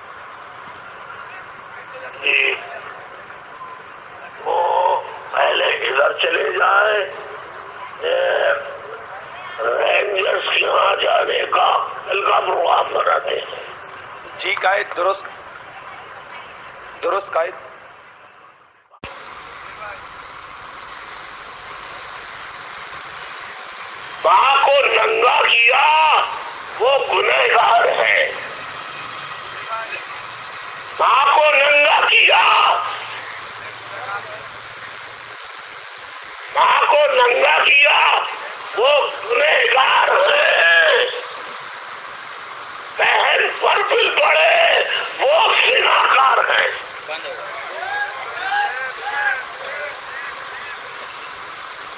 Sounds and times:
Male speech, man speaking: 0:01.3 - 0:02.9, 0:04.4 - 0:07.4, 0:08.0 - 0:13.7, 0:14.4 - 0:15.3, 0:17.0 - 0:17.7, 0:19.7 - 0:20.0, 0:24.2 - 0:28.5, 0:29.7 - 0:30.0, 0:31.0 - 0:33.0, 0:33.9 - 0:34.5, 0:36.6 - 0:41.4, 0:43.0 - 0:50.8.

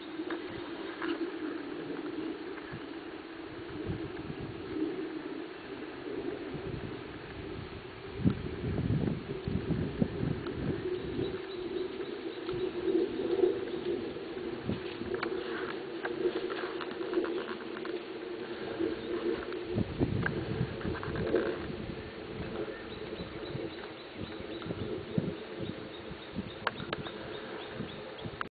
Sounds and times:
Animal: 0:00.0 - 0:07.0, 0:10.2 - 0:21.8.

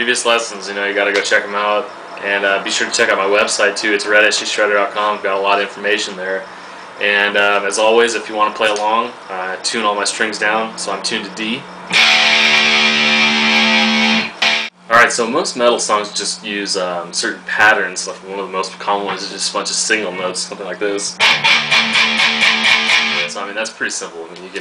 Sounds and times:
Speech: 0:00.0 - 0:11.7, 0:14.9 - 0:21.2, 0:23.2 - 0:24.6
Bass guitar: 0:11.8 - 0:14.7, 0:21.2 - 0:23.4.

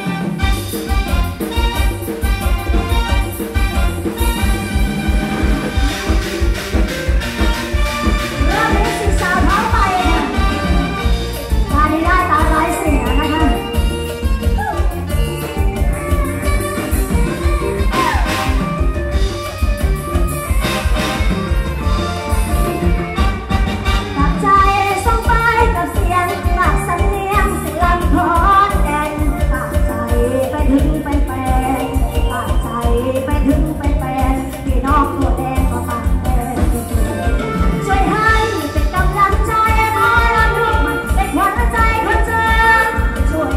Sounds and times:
Music: 0:00.0 - 0:43.5.

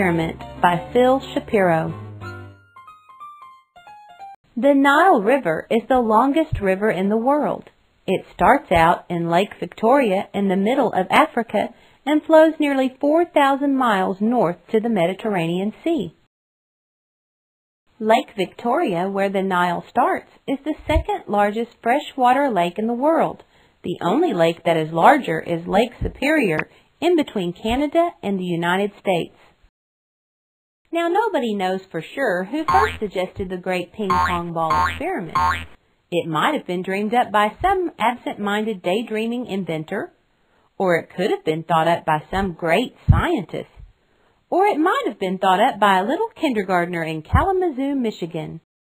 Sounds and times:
Speech: 0:00.0 - 0:02.0, 0:04.6 - 0:16.3, 0:18.0 - 0:29.4, 0:30.9 - 0:35.4, 0:36.2 - 0:40.2, 0:40.8 - 0:43.9, 0:44.5 - 0:48.7.

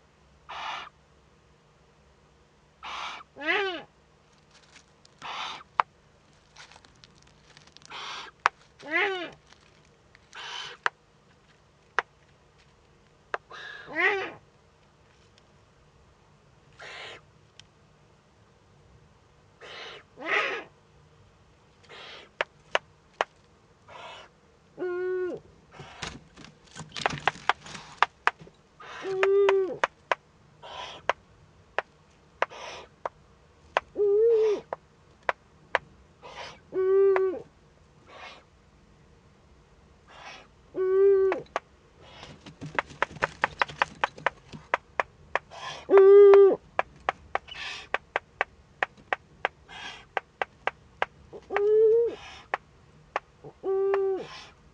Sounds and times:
Owl: 0:00.5 - 0:01.0, 0:02.8 - 0:03.9, 0:05.2 - 0:05.9, 0:07.8 - 0:09.5, 0:10.3 - 0:10.9, 0:13.4 - 0:14.4, 0:16.7 - 0:17.3, 0:19.6 - 0:20.8, 0:21.8 - 0:22.5, 0:23.9 - 0:26.2, 0:28.8 - 0:29.9, 0:30.6 - 0:31.2, 0:32.4 - 0:33.1, 0:33.8 - 0:34.8, 0:36.2 - 0:38.5, 0:40.1 - 0:43.0, 0:45.4 - 0:48.0, 0:49.4 - 0:50.5, 0:51.3 - 0:52.6, 0:53.4 - 0:54.6.

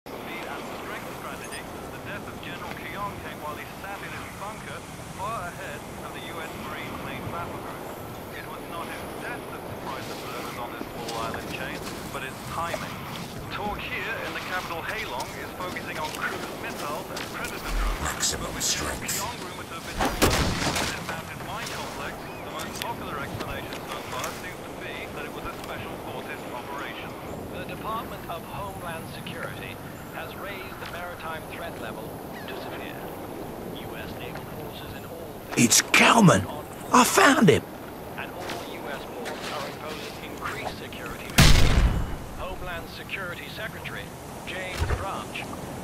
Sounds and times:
Speech: 0:00.2 - 0:33.1, 0:33.8 - 0:37.6, 0:38.2 - 0:41.4, 0:42.4 - 0:45.6.

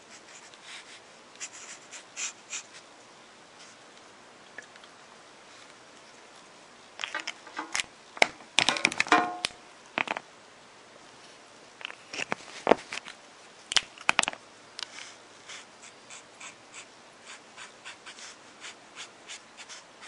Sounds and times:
Inside, small room: 0:00.0 - 0:20.0.

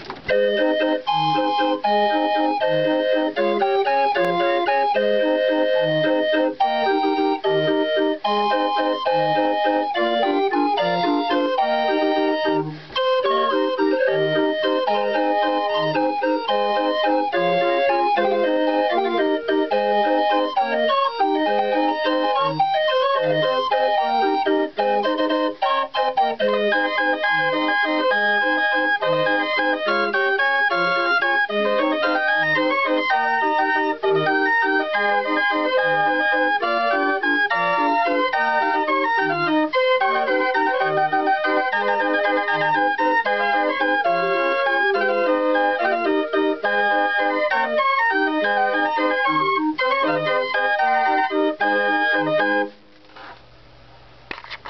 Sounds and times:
Music: 0:00.0 - 0:52.9.

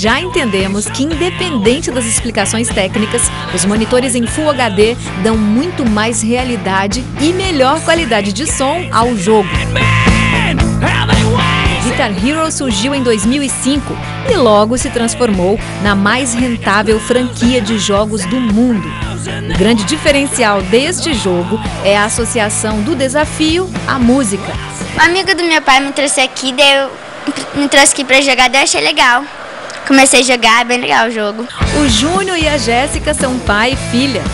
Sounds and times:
Speech: 0:00.0 - 0:10.0, 0:11.8 - 0:34.3
Electric guitar: 0:00.0 - 0:34.3.

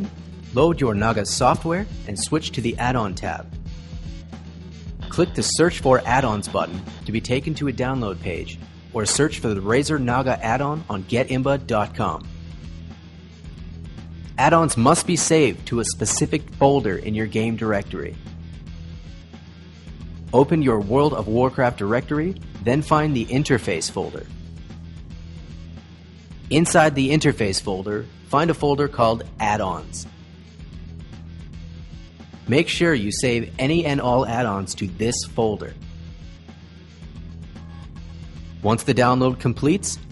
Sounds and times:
Speech: 0:00.0 - 0:03.5, 0:05.1 - 0:12.2, 0:14.4 - 0:18.2, 0:20.4 - 0:24.3, 0:26.5 - 0:30.1, 0:32.5 - 0:35.8, 0:38.6 - 0:40.1
Music: 0:00.0 - 0:40.1.

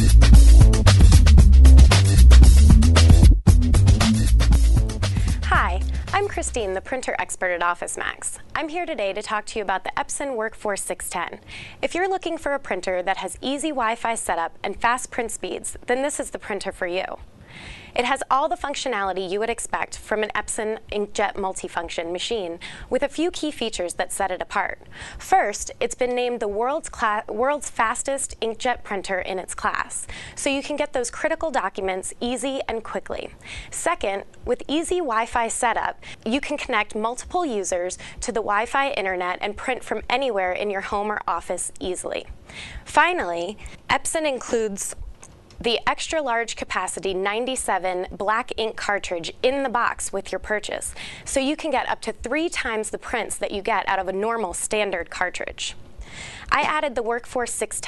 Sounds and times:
Speech: 0:05.4 - 0:17.2, 0:18.0 - 0:42.3, 0:42.9 - 0:45.0, 0:45.6 - 0:55.8, 0:56.5 - 0:57.8.

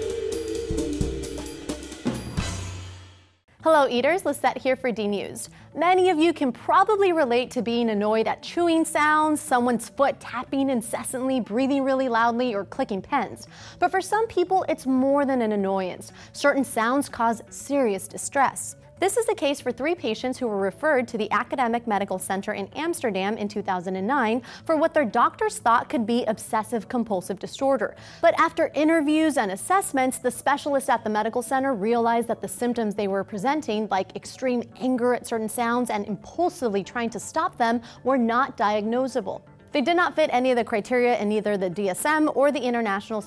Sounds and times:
Speech: 0:03.6 - 0:43.2.

